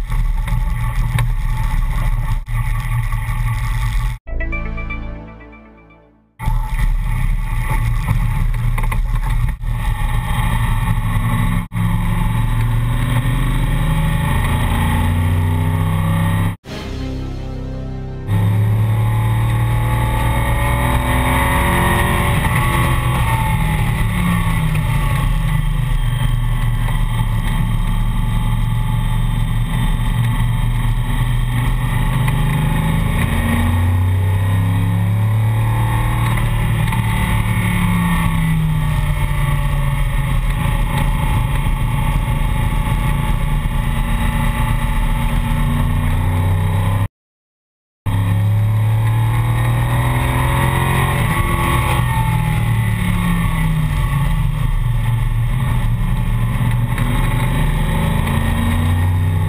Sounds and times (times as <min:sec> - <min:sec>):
Music: 0:04.3 - 0:06.5, 0:16.6 - 0:19.6.